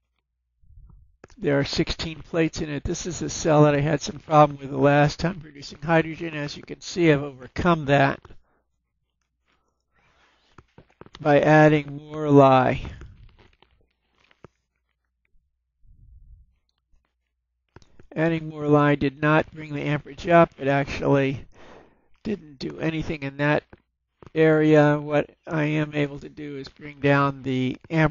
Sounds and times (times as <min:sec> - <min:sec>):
Speech: 0:01.4 - 0:08.3, 0:11.2 - 0:13.2, 0:18.2 - 0:21.5, 0:22.2 - 0:23.7, 0:24.4 - 0:28.1.